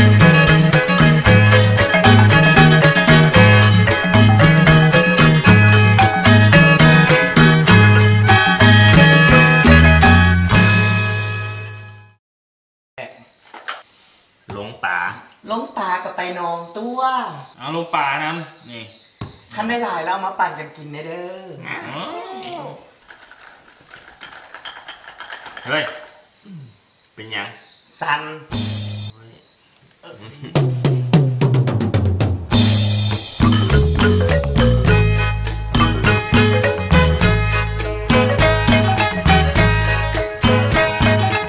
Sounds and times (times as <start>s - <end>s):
Music: 0.0s - 12.2s, 28.5s - 29.1s, 30.6s - 41.4s
Speech: 29.2s - 29.4s, 30.0s - 30.6s.